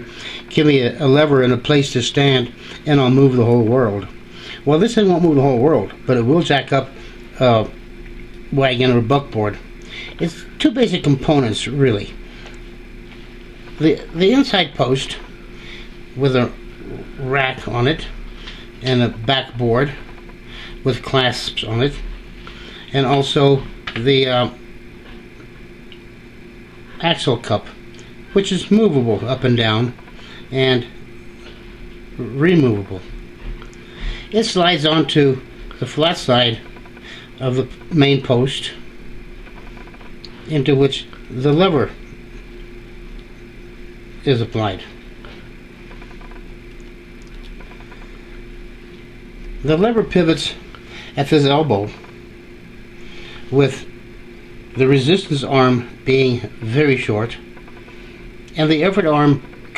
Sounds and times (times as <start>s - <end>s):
Speech: 0.5s - 7.8s, 8.5s - 9.6s, 10.2s - 12.2s, 13.8s - 15.3s, 16.2s - 18.2s, 18.8s - 20.0s, 20.8s - 22.1s, 22.9s - 24.6s, 27.0s - 27.8s, 28.4s - 31.0s, 32.2s - 33.1s, 34.3s - 36.6s, 37.4s - 38.8s, 40.5s - 42.0s, 44.2s - 45.0s, 49.6s - 50.6s, 51.2s - 52.0s, 53.5s - 53.9s, 54.8s - 57.5s, 58.5s - 59.7s.